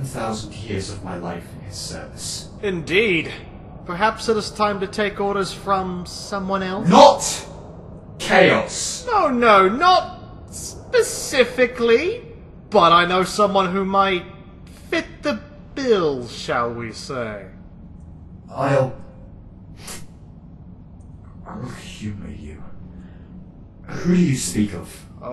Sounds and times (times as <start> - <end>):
Speech: 0.0 - 7.5, 8.2 - 17.6, 18.5 - 19.1, 21.4 - 22.8, 23.9 - 25.3.